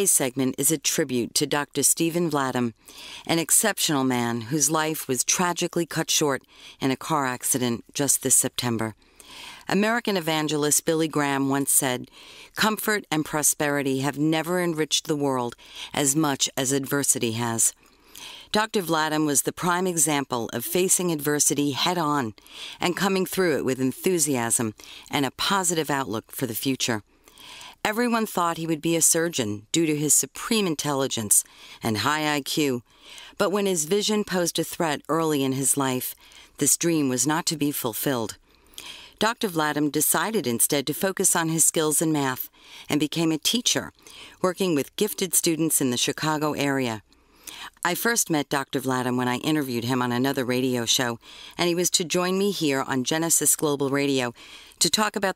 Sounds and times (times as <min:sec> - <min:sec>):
Speech: 0:00.0 - 0:09.0, 0:09.7 - 0:17.8, 0:18.5 - 0:27.0, 0:27.8 - 0:32.8, 0:33.4 - 0:38.4, 0:39.2 - 0:47.0, 0:47.7 - 0:55.3.